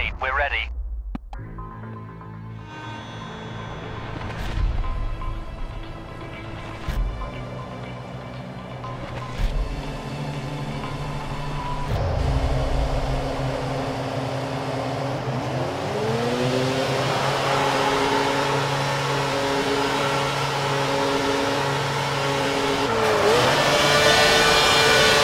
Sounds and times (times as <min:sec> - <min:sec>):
Music: 0:00.8 - 0:14.3.